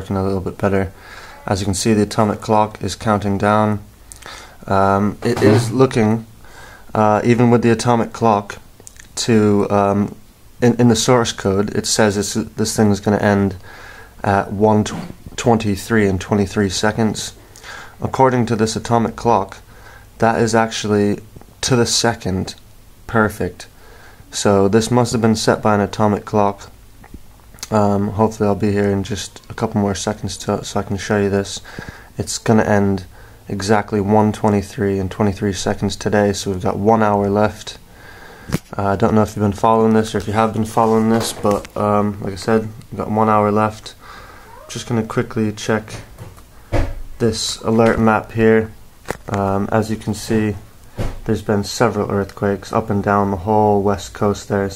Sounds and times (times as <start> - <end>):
Speech: 0.0 - 3.9, 4.6 - 6.3, 6.9 - 13.6, 14.2 - 17.4, 18.0 - 19.6, 20.2 - 23.7, 24.3 - 26.8, 27.6 - 31.6, 32.2 - 37.8, 38.7 - 46.1, 47.2 - 50.6, 51.2 - 54.7.